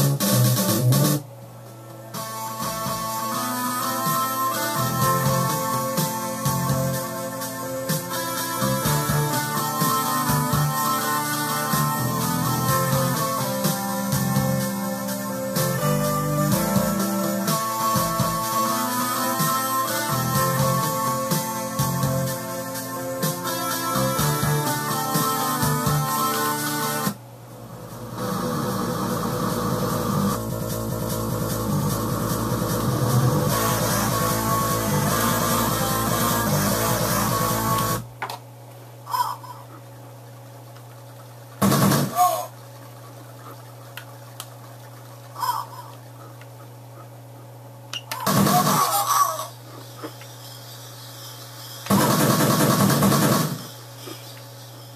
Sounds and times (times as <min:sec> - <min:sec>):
Music: 0:00.0 - 0:38.1, 0:41.6 - 0:42.5, 0:48.2 - 0:49.1, 0:50.2 - 0:54.9.